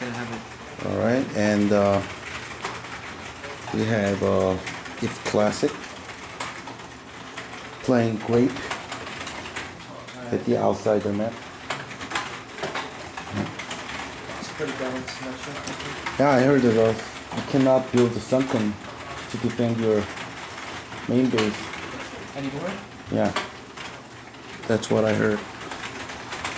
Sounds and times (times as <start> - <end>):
Speech: 3.7 - 5.8, 10.1 - 11.4, 22.3 - 23.4, 24.7 - 25.5.